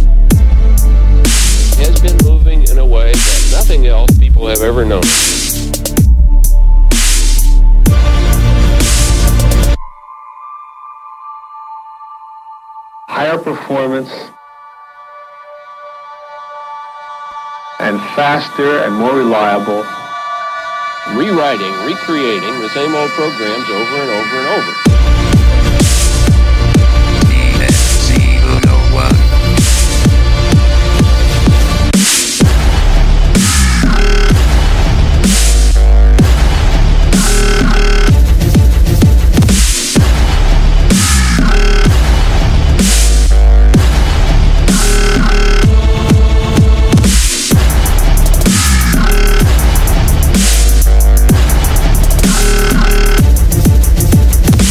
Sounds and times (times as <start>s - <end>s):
Dubstep: 0.0s - 9.8s, 17.8s - 54.7s
Speech: 1.8s - 5.1s, 13.1s - 14.4s, 17.8s - 19.9s, 21.1s - 24.8s, 27.3s - 29.2s.